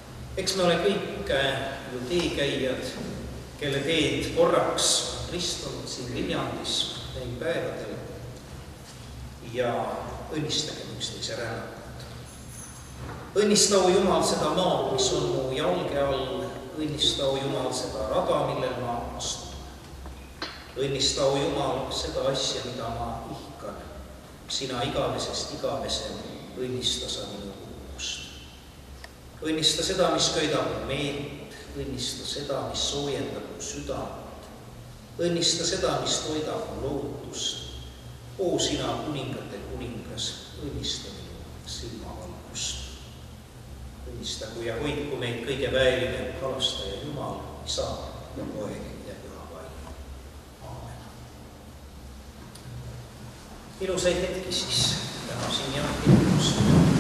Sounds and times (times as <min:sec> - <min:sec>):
Speech: 0:00.4 - 0:08.2, 0:09.4 - 0:11.9, 0:13.4 - 0:19.7, 0:20.8 - 0:28.4, 0:29.4 - 0:34.4, 0:35.2 - 0:37.8, 0:38.4 - 0:43.0, 0:44.0 - 0:50.0, 0:50.6 - 0:51.2, 0:53.8 - 0:57.0.